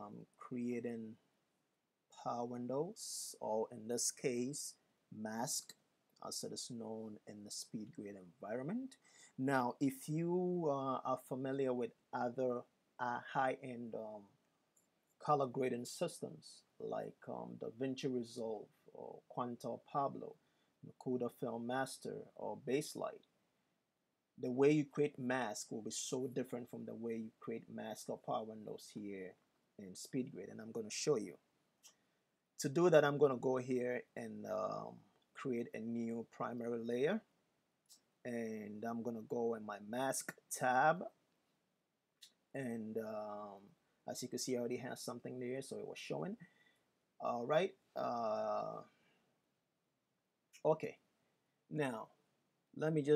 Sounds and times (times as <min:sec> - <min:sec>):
Speech: 0:00.0 - 0:01.2, 0:02.1 - 0:14.3, 0:15.2 - 0:23.3, 0:24.4 - 0:31.5, 0:32.6 - 0:37.3, 0:37.9 - 0:41.2, 0:42.2 - 0:46.4, 0:47.2 - 0:48.9, 0:50.6 - 0:51.1, 0:51.7 - 0:52.2, 0:52.8 - 0:53.1.